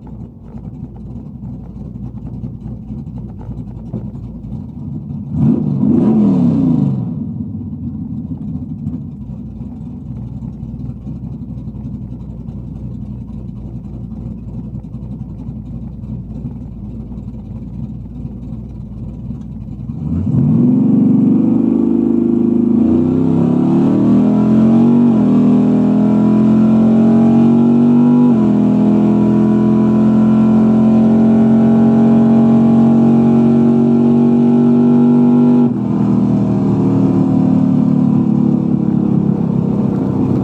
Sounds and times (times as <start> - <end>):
Car: 0.0 - 40.4.